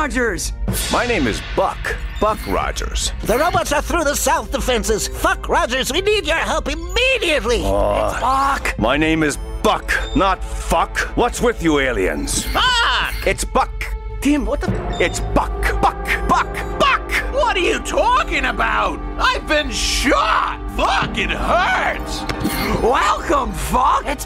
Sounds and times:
Music: 0.0 - 24.2.

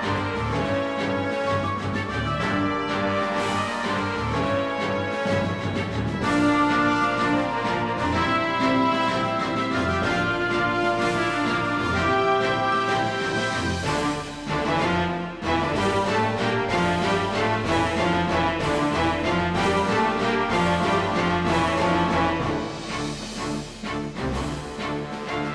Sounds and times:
Tender music: 0.0 - 25.5
Theme music: 0.0 - 25.5.

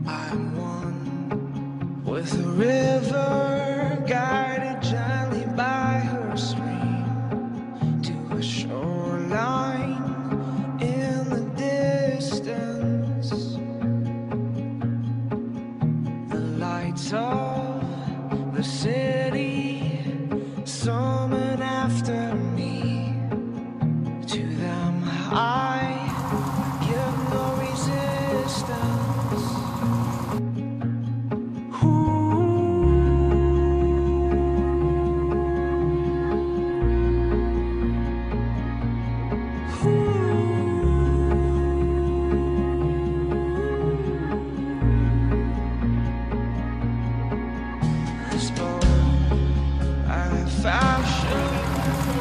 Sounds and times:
Music: 0.0 - 52.2.

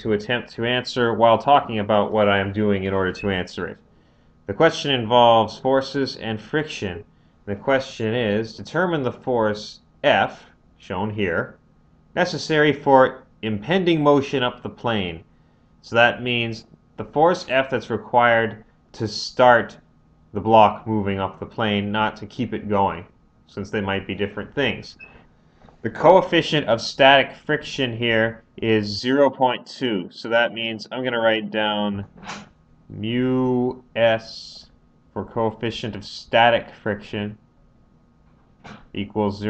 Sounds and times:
Speech: 0.0 - 3.8, 4.5 - 11.6, 12.2 - 19.8, 20.4 - 25.1, 25.8 - 32.1, 32.9 - 37.4, 38.9 - 39.5.

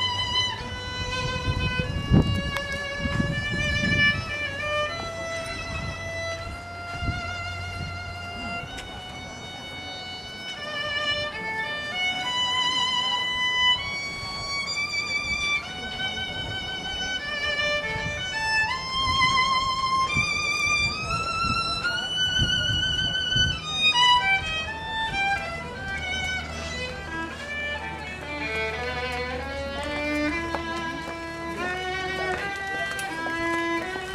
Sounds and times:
Violin, fiddle: 0.0 - 34.1.

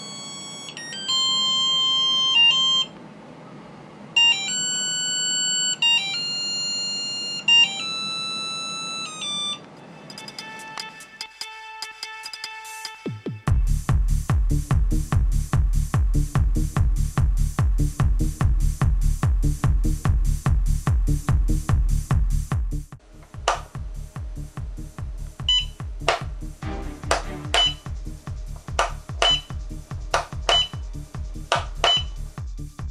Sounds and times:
Music: 9.8 - 32.9.

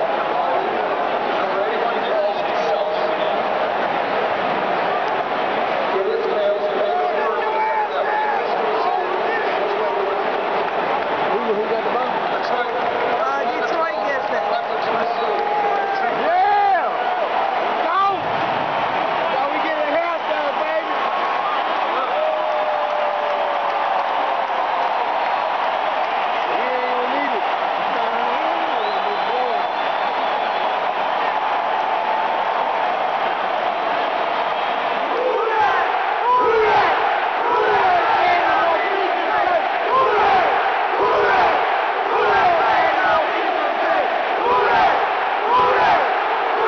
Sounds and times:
Speech: 1.4 - 3.4, 11.3 - 17.0, 19.3 - 20.9, 26.5 - 29.7.

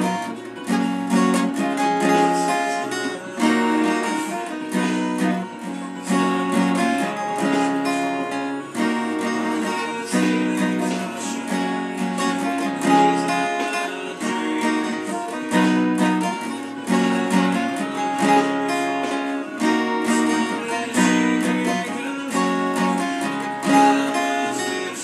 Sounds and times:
Acoustic guitar: 0.0 - 25.0.

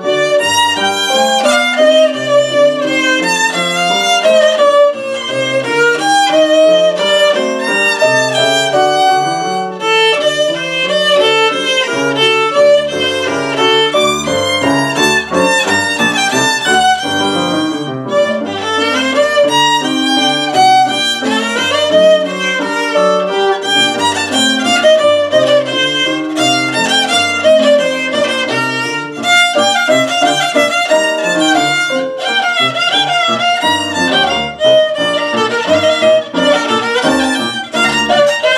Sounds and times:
Violin, fiddle: 0.0 - 38.5.

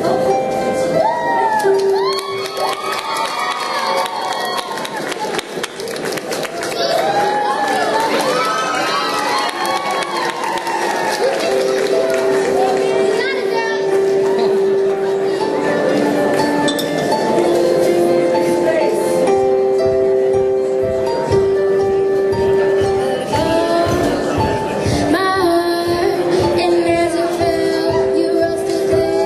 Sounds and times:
Music: 0.0 - 29.2.

